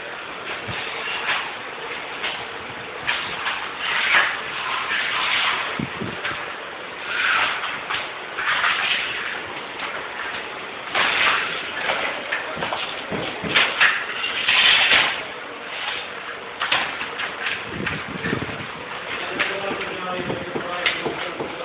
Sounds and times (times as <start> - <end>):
Speech: 19.2 - 21.6.